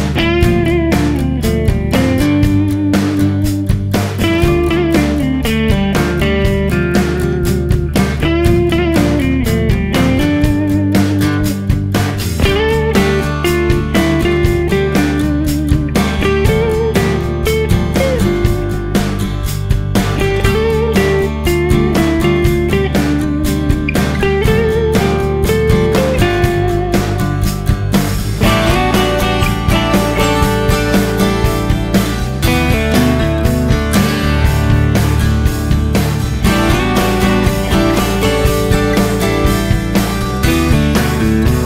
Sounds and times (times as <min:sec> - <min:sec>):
Music: 0:00.0 - 0:41.6.